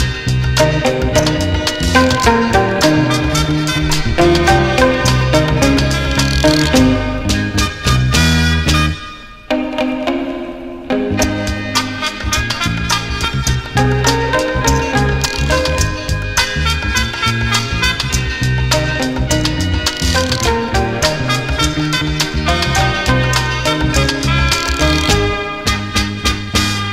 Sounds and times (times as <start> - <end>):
Guitar: 0.0 - 26.9.